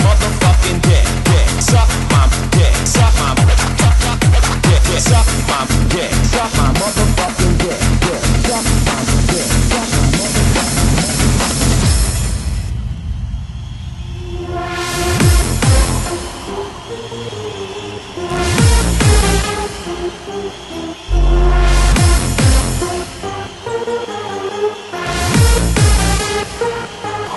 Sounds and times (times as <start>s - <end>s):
Music: 0.0s - 13.0s, 14.3s - 27.3s.